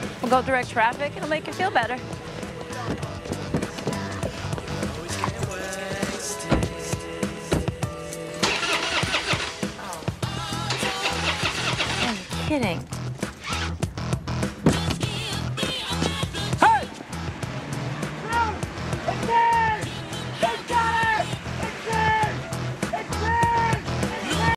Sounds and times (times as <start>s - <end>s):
Music: 0.0s - 24.5s
Car passing by: 17.0s - 19.6s.